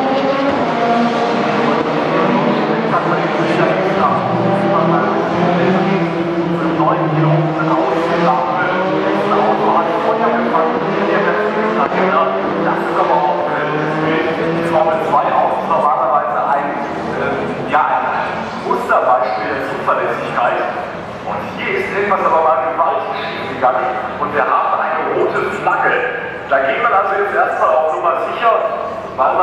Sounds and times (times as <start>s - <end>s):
Car: 0.0s - 29.4s
Speech: 1.6s - 29.4s.